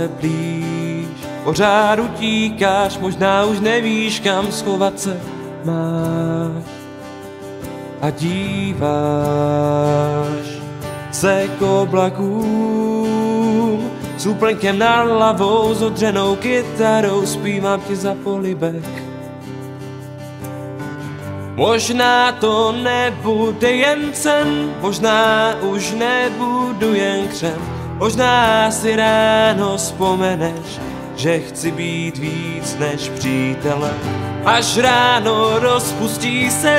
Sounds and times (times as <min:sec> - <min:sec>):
Middle Eastern music: 0:00.0 - 0:36.7.